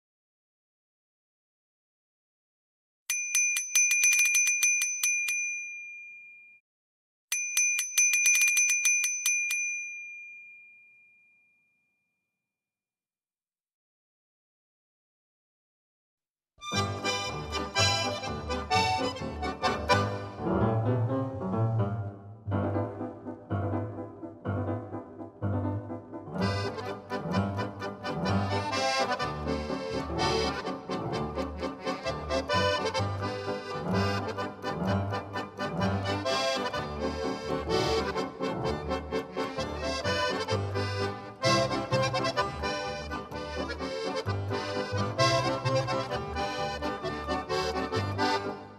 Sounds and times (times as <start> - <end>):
Bicycle bell: 3.1 - 6.6, 7.3 - 12.2.